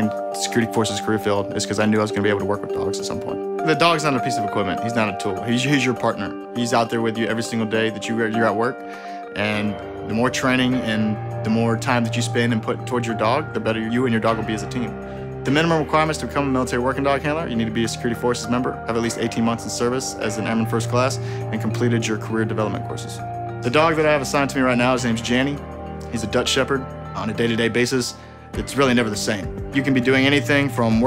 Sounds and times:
Speech: 0.0s - 8.8s, 9.4s - 31.0s
Music: 0.0s - 31.0s.

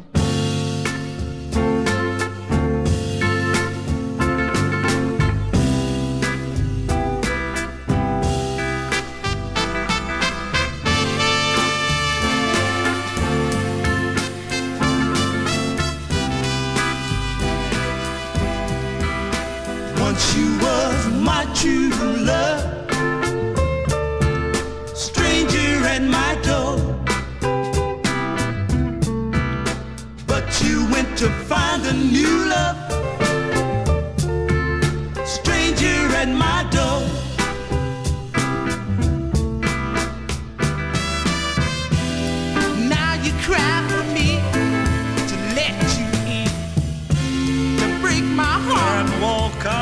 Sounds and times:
Music: 0.0s - 49.8s.

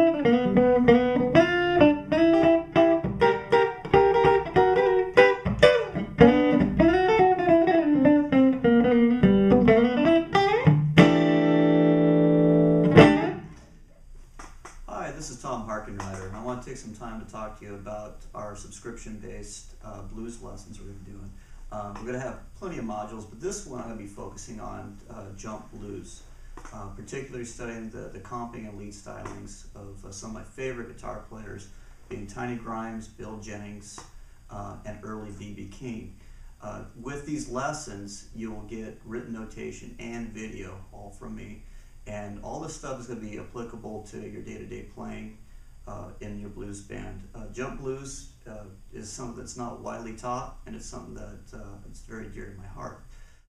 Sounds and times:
Strum: 0.0s - 14.0s
Speech: 14.9s - 53.1s.

